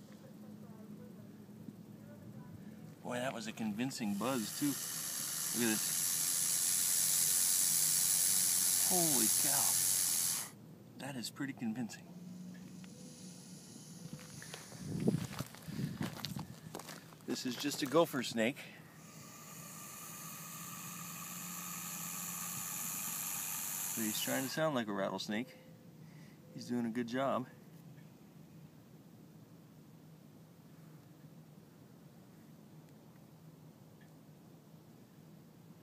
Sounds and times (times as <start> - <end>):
Hiss: 3.9 - 10.6, 12.2 - 15.1, 19.0 - 24.6.